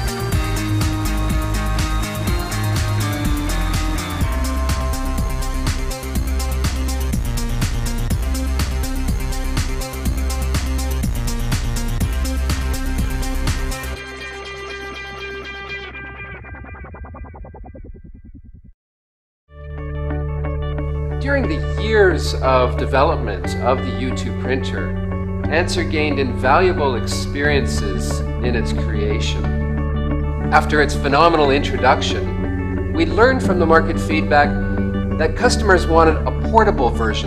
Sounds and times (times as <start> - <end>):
Music: 0.0 - 18.7, 19.5 - 37.2
Speech: 21.2 - 24.9, 25.5 - 29.5, 30.5 - 32.3, 33.0 - 34.6, 35.2 - 37.2.